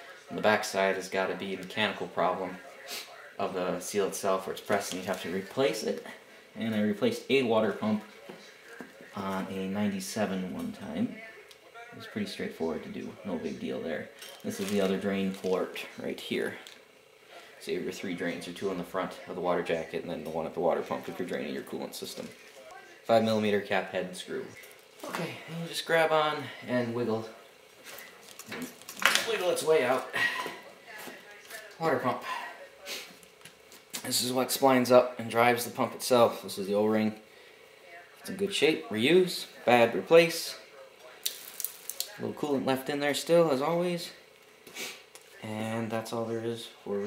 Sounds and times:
Speech: 0.0s - 16.7s, 17.4s - 27.4s, 28.6s - 33.1s, 34.0s - 37.2s, 37.9s - 41.3s, 42.0s - 44.2s, 45.4s - 47.0s.

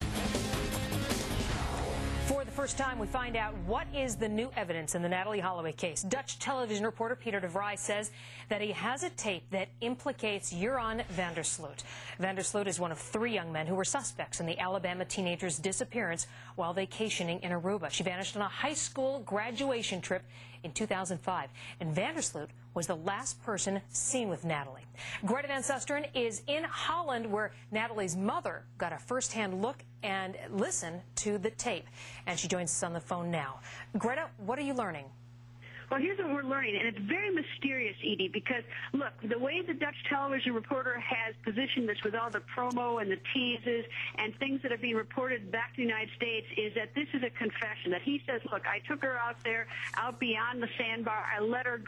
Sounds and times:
Speech: 2.3s - 35.1s, 35.9s - 51.8s.

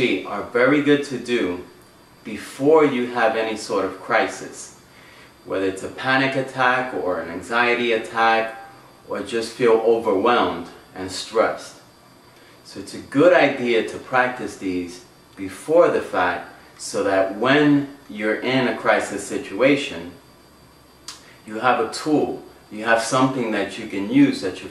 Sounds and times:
Speech: 0.0s - 1.7s, 2.3s - 4.8s, 5.5s - 11.8s, 12.7s - 20.2s, 21.4s - 24.7s.

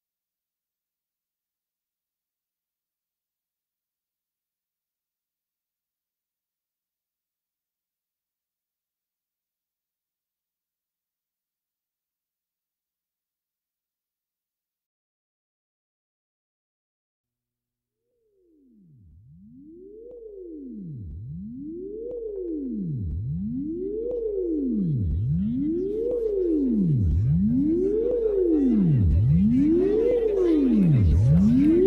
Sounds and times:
Music: 18.3s - 31.8s.

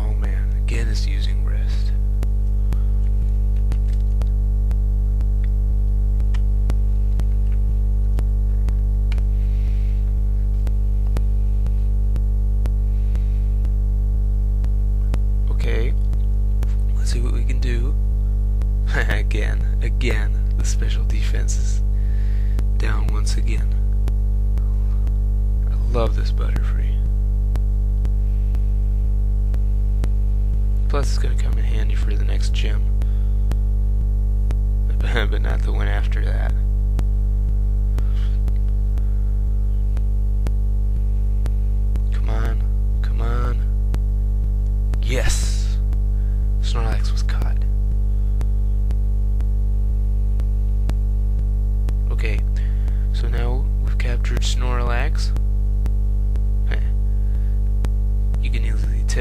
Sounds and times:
Speech: 0.0s - 2.0s, 15.4s - 16.1s, 16.7s - 18.0s, 18.8s - 21.8s, 22.8s - 23.8s, 25.6s - 27.1s, 30.8s - 32.9s, 34.9s - 36.6s, 42.0s - 43.7s, 45.0s - 45.8s, 46.6s - 47.7s, 52.0s - 55.4s, 56.6s - 57.0s, 58.4s - 59.2s.

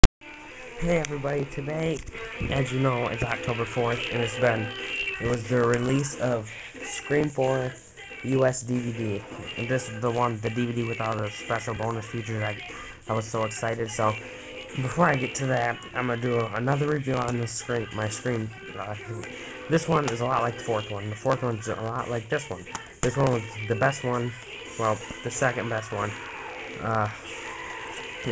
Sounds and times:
Music: 0.0s - 28.3s
Speech: 0.8s - 14.2s, 14.8s - 26.2s, 26.8s - 27.2s.

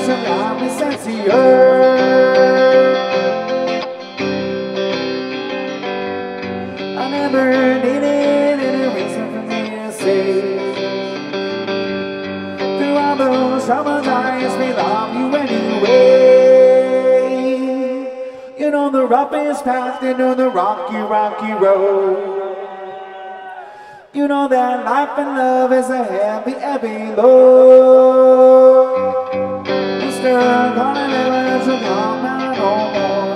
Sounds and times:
Singing: 0.0s - 3.7s, 12.8s - 33.3s
Music: 0.0s - 18.6s, 28.4s - 33.3s.

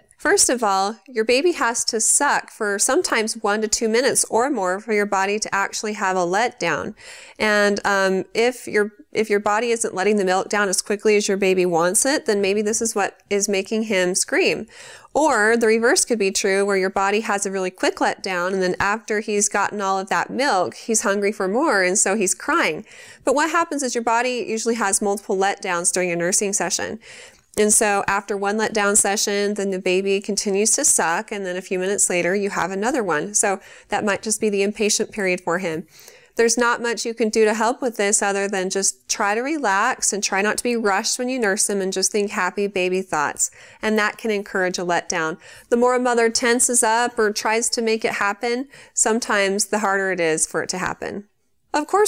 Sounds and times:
Speech: 0.0s - 27.0s, 27.6s - 35.8s, 36.4s - 52.0s.

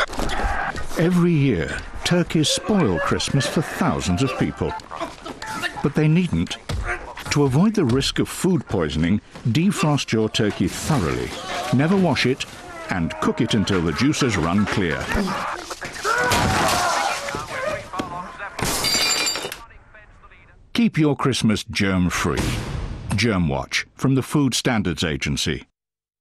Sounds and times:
Speech: 1.0s - 4.8s, 5.4s - 15.5s, 17.1s - 18.6s, 19.5s - 25.7s.

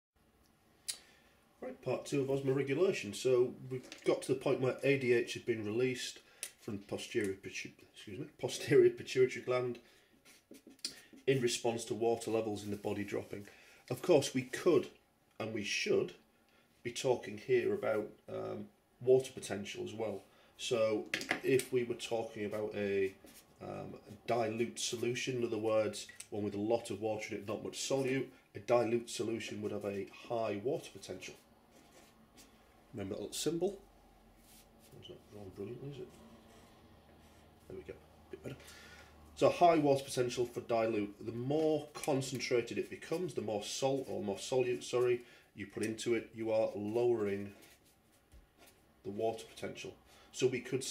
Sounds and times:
Speech: 1.6s - 9.8s, 11.2s - 16.2s, 16.8s - 31.4s, 32.9s - 33.8s, 34.9s - 36.2s, 37.6s - 38.6s, 39.4s - 47.6s, 49.0s - 50.9s.

